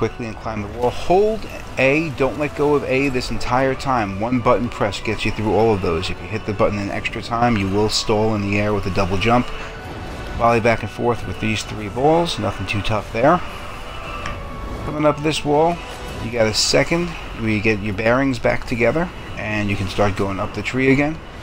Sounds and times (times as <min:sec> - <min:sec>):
Speech: 0:00.0 - 0:09.5, 0:10.4 - 0:13.5, 0:14.9 - 0:21.2.